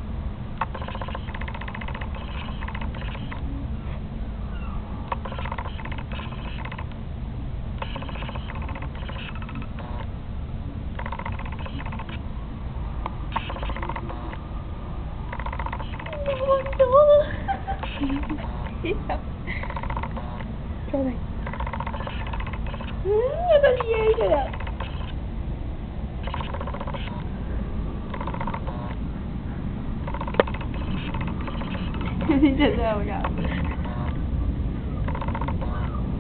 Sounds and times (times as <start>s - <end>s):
Speech: 16.2s - 17.3s, 23.1s - 24.5s, 32.7s - 33.4s.